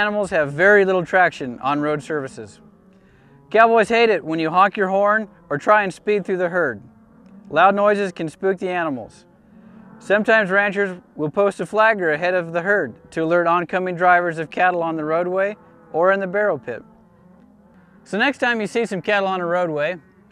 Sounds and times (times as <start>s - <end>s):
Speech: 0.0s - 2.6s, 3.6s - 6.8s, 7.5s - 9.2s, 10.0s - 16.8s, 18.1s - 20.0s.